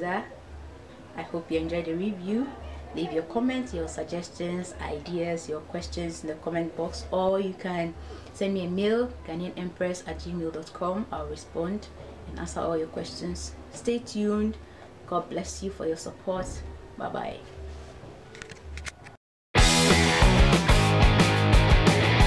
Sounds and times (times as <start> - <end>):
Music: 0.2 - 13.8, 19.6 - 22.2
Speech: 1.2 - 17.5.